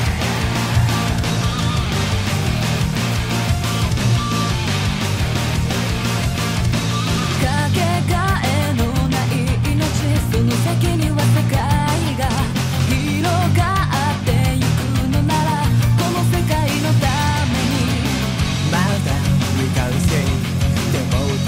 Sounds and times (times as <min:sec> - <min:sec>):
Music: 0:00.0 - 0:21.4.